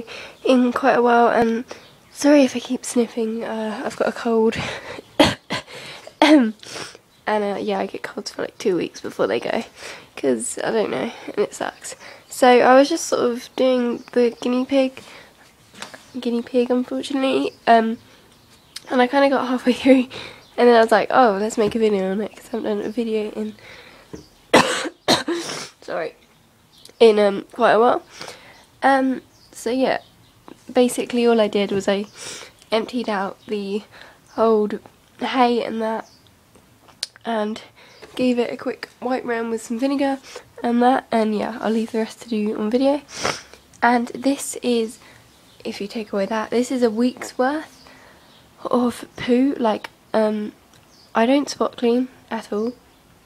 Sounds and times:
Speech: 0.0s - 4.6s, 7.3s - 15.0s, 16.1s - 18.0s, 18.8s - 23.6s, 25.8s - 26.2s, 27.0s - 28.0s, 28.8s - 30.0s, 30.6s - 32.1s, 32.7s - 36.0s, 37.1s - 43.1s, 43.8s - 45.0s, 45.6s - 47.7s, 48.6s - 50.6s, 51.2s - 52.8s.

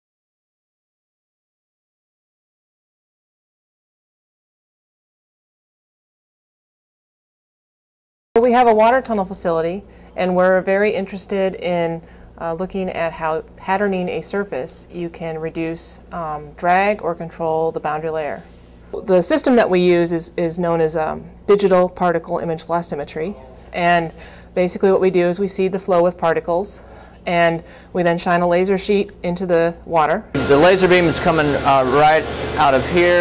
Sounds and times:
Speech: 8.4s - 18.4s, 19.0s - 33.2s.

